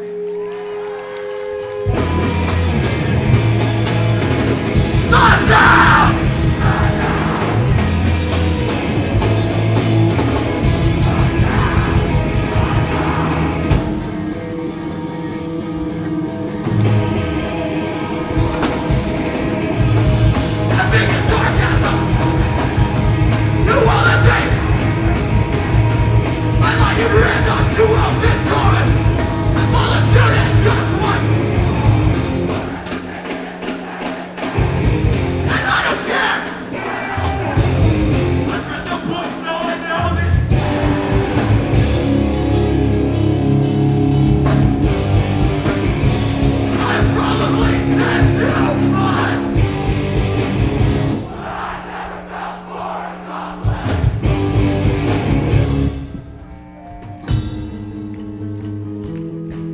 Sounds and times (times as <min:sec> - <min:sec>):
Music: 0:00.0 - 0:59.7.